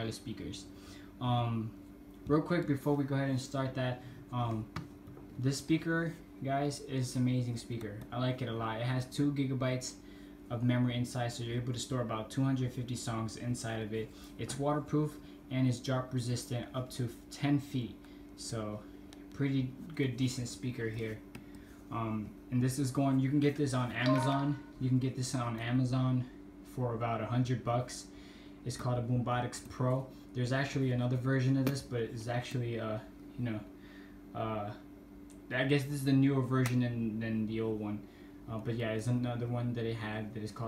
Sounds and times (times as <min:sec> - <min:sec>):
Speech: 0:00.0 - 0:04.8, 0:05.4 - 0:21.2, 0:21.9 - 0:33.7, 0:34.3 - 0:40.6.